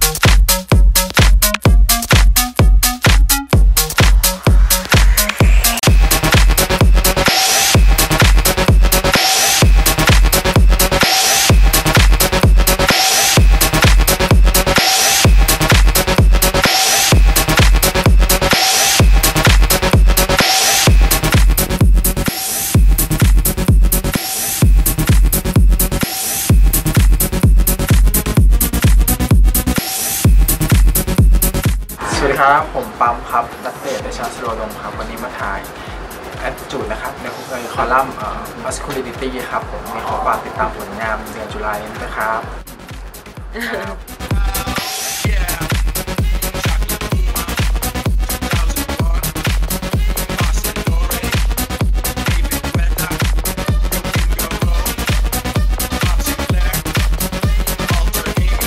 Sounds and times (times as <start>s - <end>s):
Music: 0.0s - 58.6s
Speech: 32.0s - 35.7s, 36.4s - 42.5s.